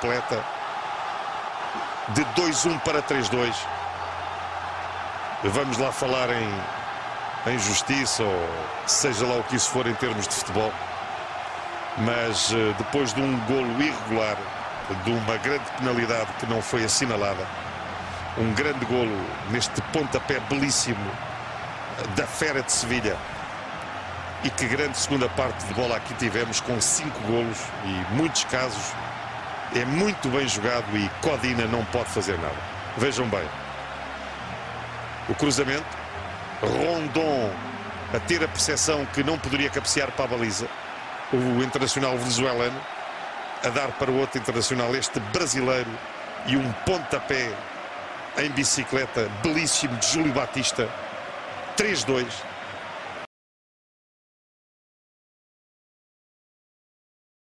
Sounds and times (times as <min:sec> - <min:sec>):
Speech: 0:00.0 - 0:00.4, 0:02.1 - 0:03.7, 0:05.4 - 0:06.7, 0:07.4 - 0:10.8, 0:12.0 - 0:17.5, 0:18.4 - 0:21.2, 0:22.0 - 0:23.2, 0:24.4 - 0:29.0, 0:29.7 - 0:33.5, 0:35.3 - 0:35.9, 0:36.6 - 0:40.7, 0:41.3 - 0:42.8, 0:43.6 - 0:47.6, 0:48.4 - 0:50.9, 0:51.8 - 0:52.4.